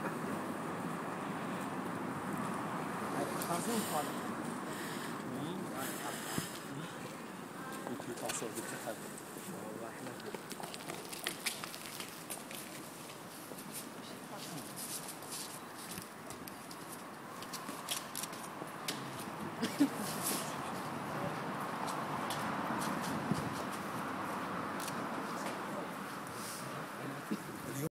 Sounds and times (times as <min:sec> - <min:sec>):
Speech: 0:27.0 - 0:27.9.